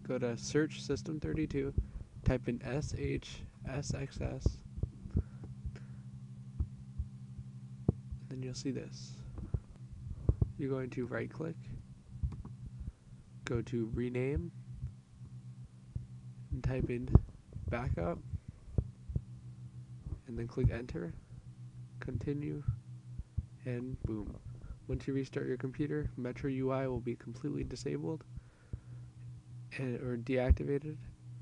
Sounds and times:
Speech: 0.0 - 4.6, 8.2 - 9.3, 10.6 - 11.8, 13.4 - 14.6, 16.5 - 18.3, 20.2 - 21.2, 22.0 - 22.8, 23.6 - 28.3, 29.7 - 31.1.

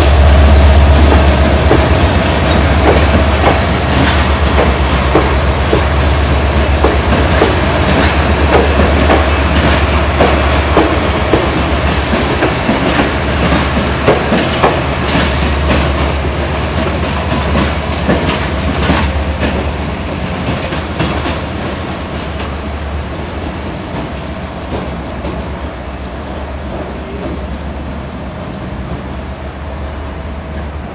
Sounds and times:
Railroad car, train wagon: 0.0 - 30.9
Train: 0.0 - 30.9.

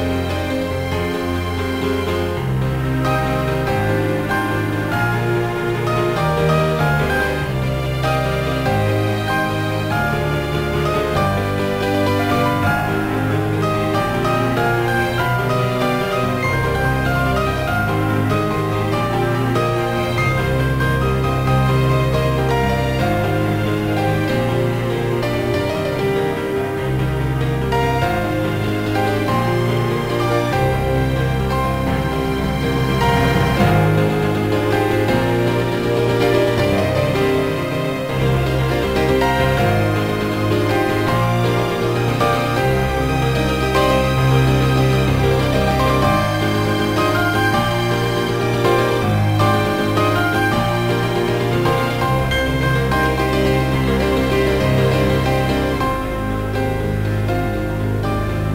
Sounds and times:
Theme music: 0.0 - 58.5.

